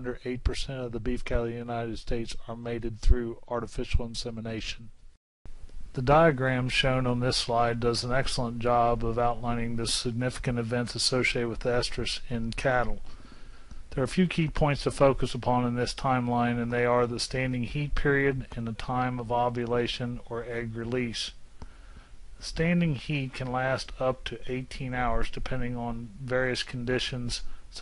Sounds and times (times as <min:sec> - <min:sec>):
Speech: 0:00.0 - 0:05.0, 0:05.9 - 0:13.1, 0:13.9 - 0:21.4, 0:22.4 - 0:27.8.